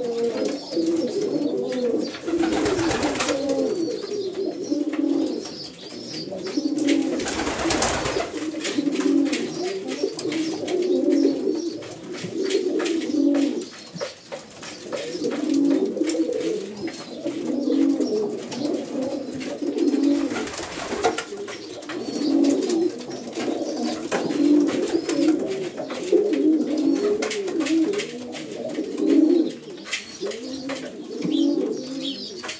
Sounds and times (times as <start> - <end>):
Pigeon, dove: 0.0 - 32.5.